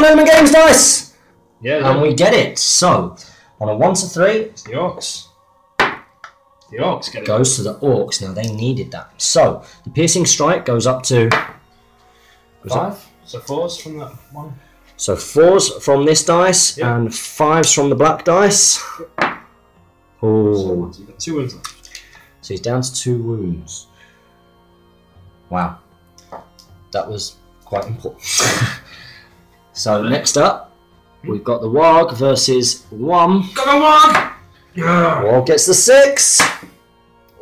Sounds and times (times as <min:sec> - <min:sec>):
Speech: 0:00.0 - 0:05.3, 0:06.7 - 0:11.4, 0:12.6 - 0:19.1, 0:20.2 - 0:21.6, 0:22.4 - 0:23.9, 0:25.5 - 0:25.8, 0:27.0 - 0:28.8, 0:29.8 - 0:36.6.